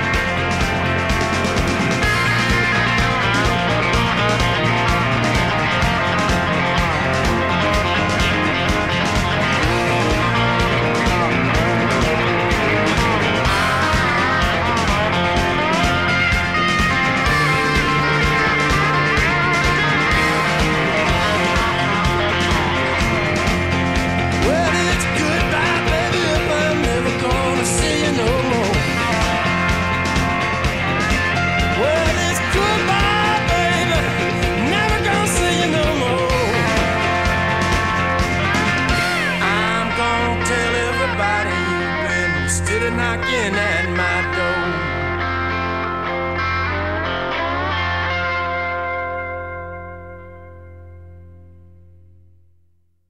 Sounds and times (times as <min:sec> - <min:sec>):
Guitar: 0:00.0 - 0:52.5.